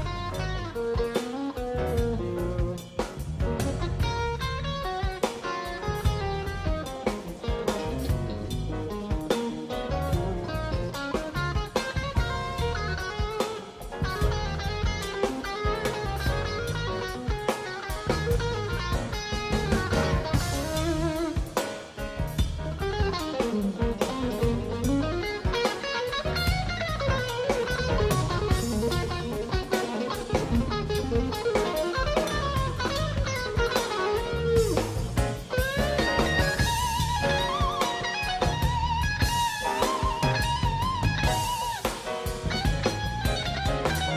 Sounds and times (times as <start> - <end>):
Electric guitar: 0.0 - 44.1.